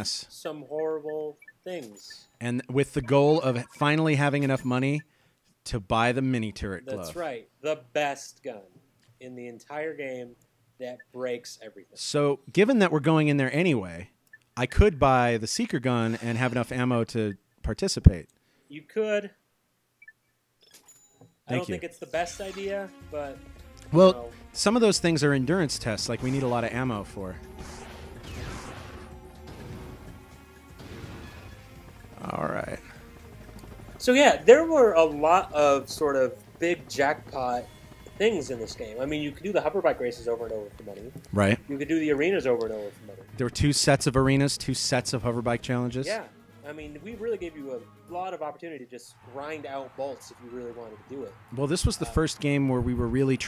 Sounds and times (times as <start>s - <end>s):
Speech: 0.0s - 5.0s, 5.7s - 19.4s, 21.5s - 27.4s, 34.0s - 53.4s.